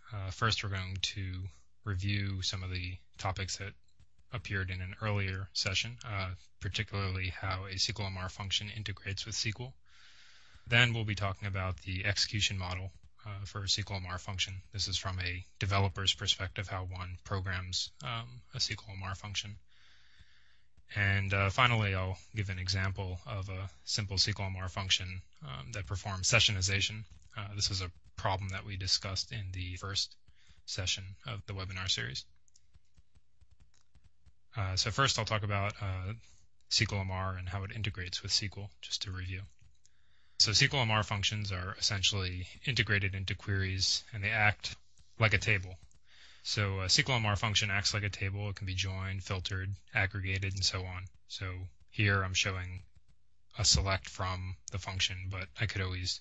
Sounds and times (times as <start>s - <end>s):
Speech: 0.0s - 9.8s, 10.6s - 19.7s, 20.9s - 32.3s, 34.5s - 39.5s, 40.4s - 52.8s, 53.5s - 56.2s.